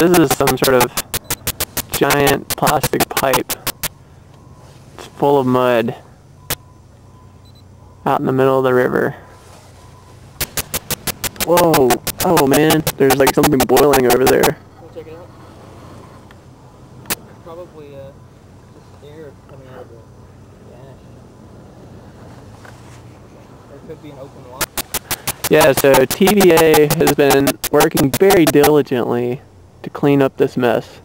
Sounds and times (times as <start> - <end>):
Speech: 0.0 - 1.0, 2.0 - 3.6, 5.0 - 6.1, 8.0 - 9.2, 11.4 - 15.3, 17.4 - 21.1, 23.7 - 24.7, 25.5 - 31.0.